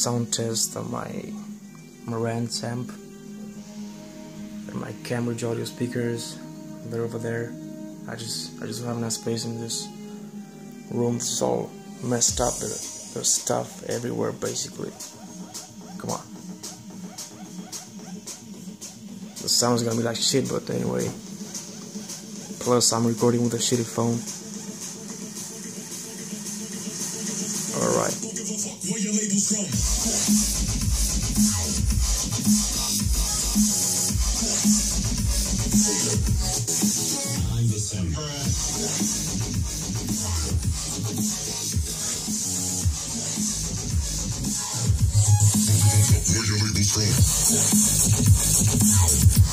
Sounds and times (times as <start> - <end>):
Speech: 0.0 - 3.0, 4.7 - 10.0, 10.9 - 15.0, 16.0 - 16.3, 19.4 - 21.2, 22.6 - 24.2, 27.7 - 29.5, 46.2 - 47.2
Music: 0.0 - 49.5.